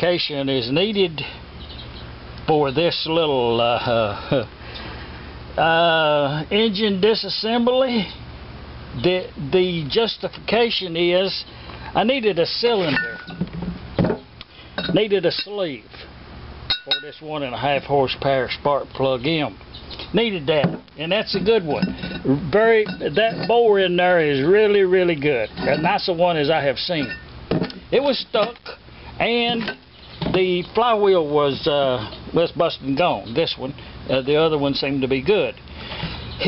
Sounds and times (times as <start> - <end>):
Speech: 0.0 - 1.4, 2.4 - 4.5, 5.6 - 8.2, 8.9 - 13.2, 14.9 - 16.0, 16.9 - 27.2, 27.9 - 35.6.